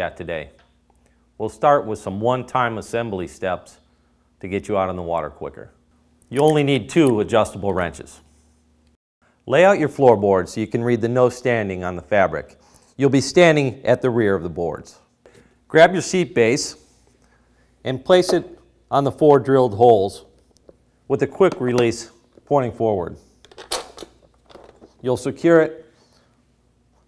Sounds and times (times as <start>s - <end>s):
Speech: 0.0s - 0.6s, 1.4s - 3.8s, 4.4s - 8.3s, 9.5s - 15.0s, 15.7s - 16.8s, 17.8s - 20.3s, 21.1s - 23.2s, 25.0s - 25.8s.